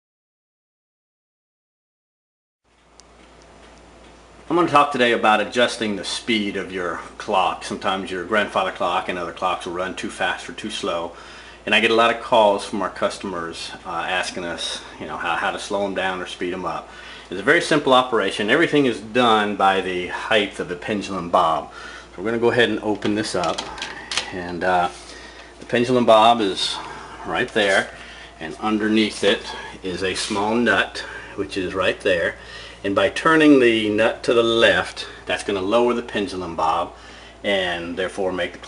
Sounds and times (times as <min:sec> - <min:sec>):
Speech: 0:04.5 - 0:25.0, 0:25.6 - 0:38.6.